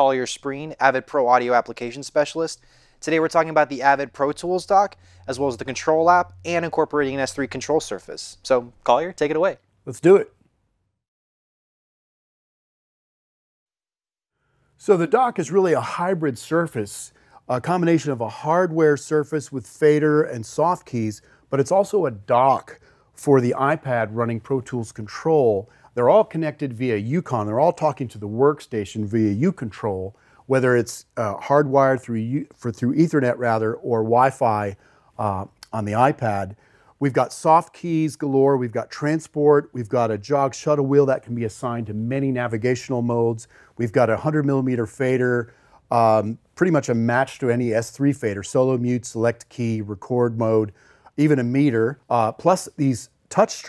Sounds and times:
Speech: 0.0 - 10.4, 14.8 - 53.6.

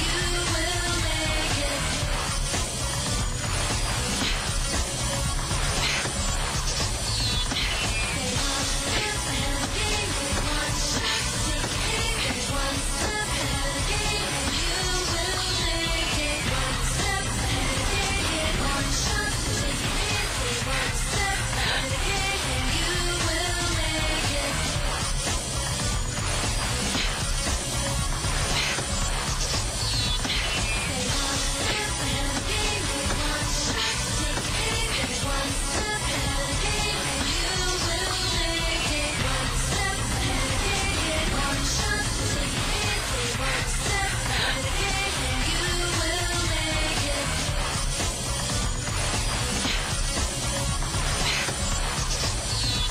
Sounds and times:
Music: 0.0 - 52.9.

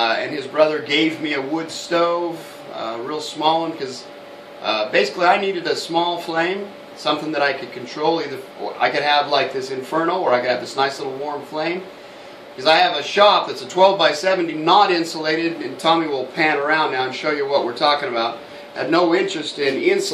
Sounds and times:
Speech: 0.0 - 11.9, 12.6 - 20.1.

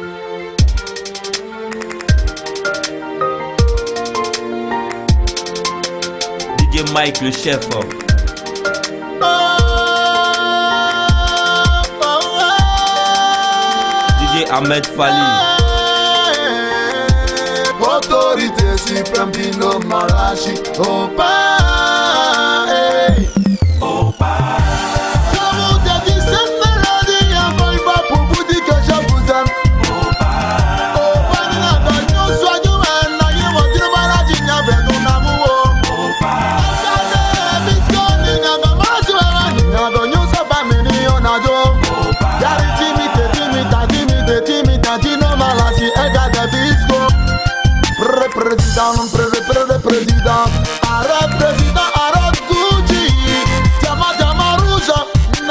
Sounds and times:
Music: 0.0 - 55.5.

